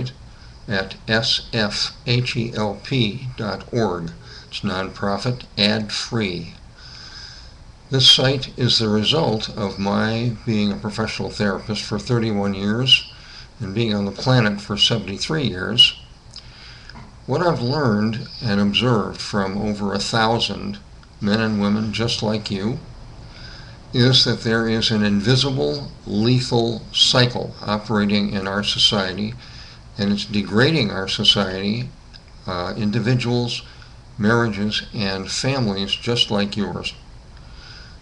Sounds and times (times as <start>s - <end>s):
Speech: 0.0s - 6.6s, 7.9s - 16.0s, 17.3s - 22.9s, 23.9s - 29.4s, 30.0s - 37.0s.